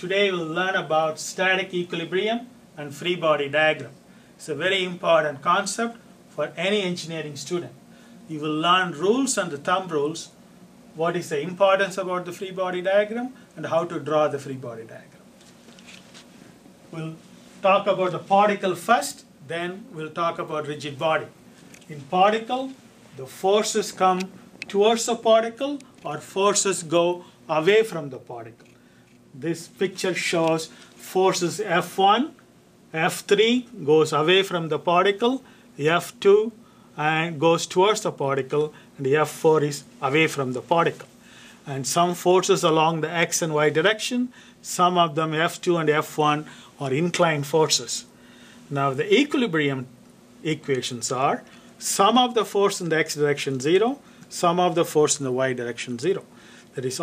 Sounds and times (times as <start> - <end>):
Speech: 0.0 - 10.4, 11.0 - 15.2, 16.9 - 28.6, 29.4 - 48.1, 48.7 - 57.0.